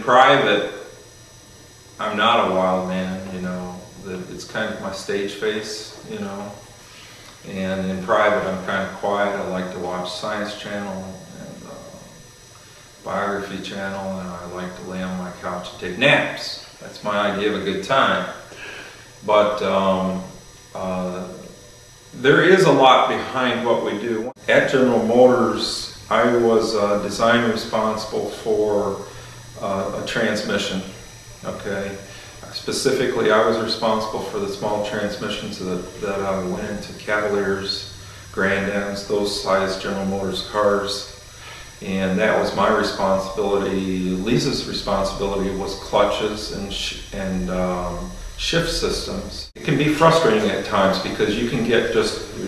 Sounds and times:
Speech: 0.0 - 1.0, 2.0 - 6.7, 7.4 - 12.2, 13.0 - 52.4
Inside, small room: 0.0 - 52.4.

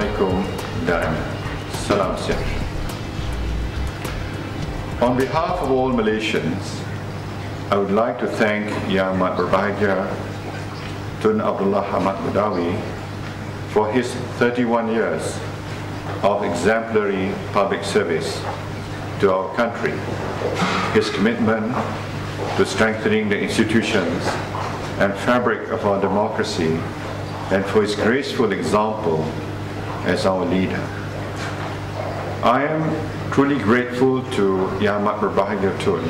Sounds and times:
Male speech, man speaking: 0.0 - 2.7, 5.0 - 6.9, 7.7 - 10.3, 11.2 - 12.9, 13.7 - 15.5, 16.2 - 18.5, 19.2 - 20.1, 20.7 - 21.9, 22.6 - 26.9, 27.5 - 29.4, 30.0 - 31.0, 32.4 - 36.0
Narration, monologue: 0.0 - 36.0.

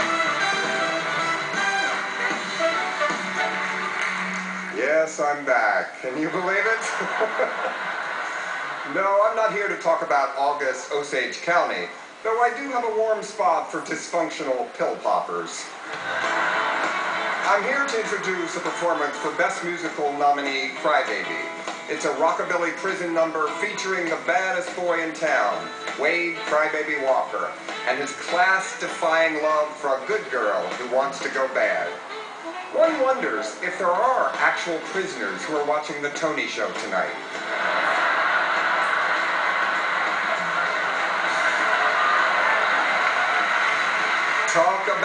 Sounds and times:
Music: 0.0 - 11.4, 15.8 - 45.0
Speech: 4.8 - 7.0, 8.9 - 15.7, 17.5 - 32.0, 32.8 - 37.2, 44.5 - 45.0.

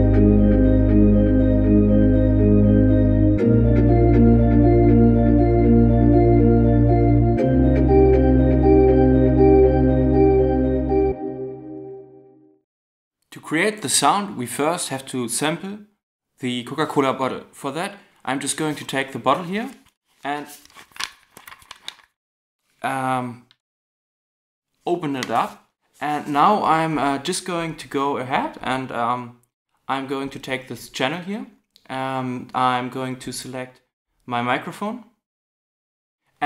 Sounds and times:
Speech: 13.3 - 20.6, 22.8 - 23.5, 24.9 - 35.2.

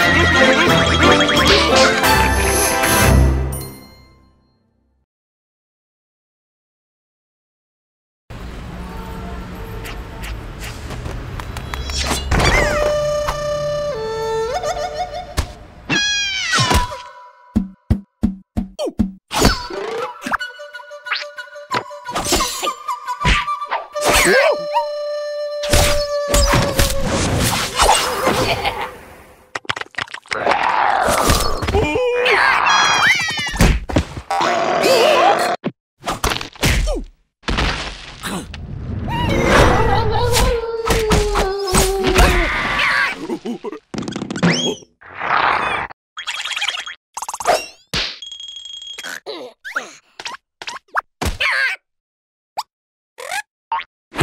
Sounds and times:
Music: 0.0 - 5.0, 12.8 - 15.7, 19.7 - 26.4.

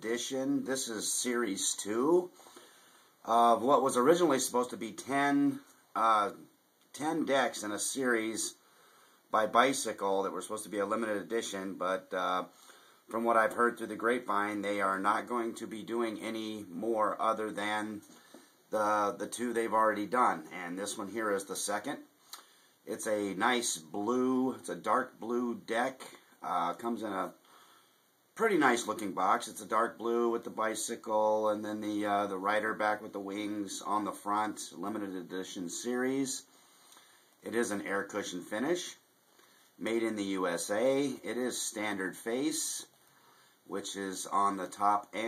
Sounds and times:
Speech: 0.0 - 2.4, 3.2 - 8.6, 9.3 - 18.1, 18.7 - 22.1, 22.8 - 27.4, 28.4 - 36.5, 37.4 - 39.0, 39.8 - 43.0, 43.7 - 45.2.

